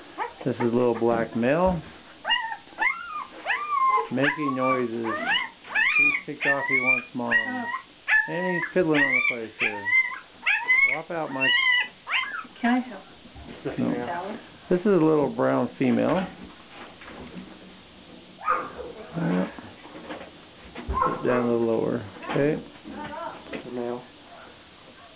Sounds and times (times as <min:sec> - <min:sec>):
Dog: 0:02.2 - 0:12.5, 0:18.4 - 0:19.0, 0:20.9 - 0:21.5, 0:24.3 - 0:25.1.